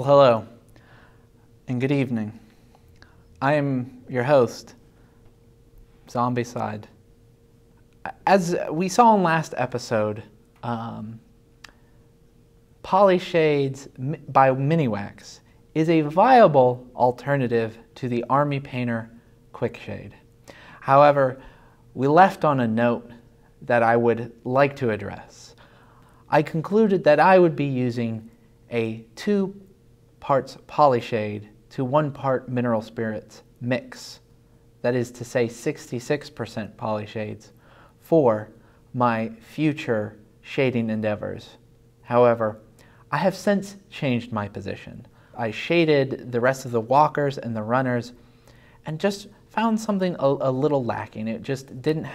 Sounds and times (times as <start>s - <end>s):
Speech: 0.0s - 0.6s, 1.7s - 2.5s, 3.4s - 4.8s, 6.1s - 7.0s, 8.0s - 11.3s, 12.8s - 20.2s, 20.8s - 25.6s, 26.3s - 48.2s, 48.8s - 52.1s.